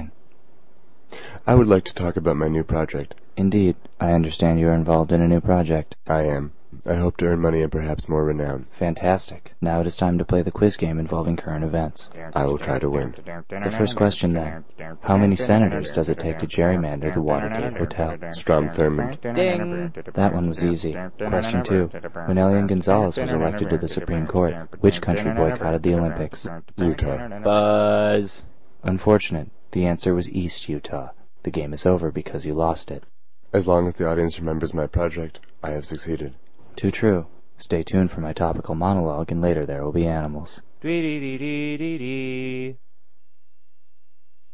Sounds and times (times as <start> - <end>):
Speech: 1.4 - 42.8.